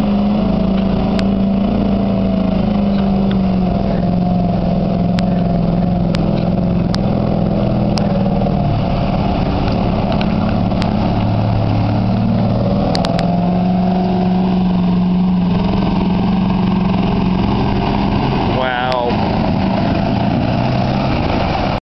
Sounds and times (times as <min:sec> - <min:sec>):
Speech: 0:18.5 - 0:19.2.